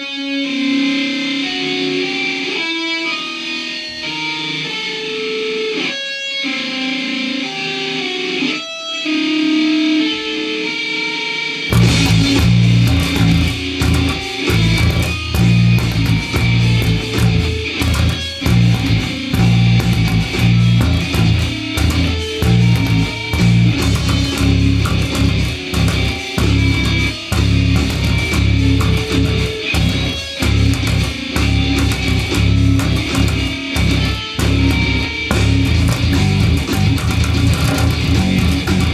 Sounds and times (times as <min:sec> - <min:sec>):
Electric guitar: 0:00.0 - 0:38.9
Strum: 0:11.6 - 0:38.9.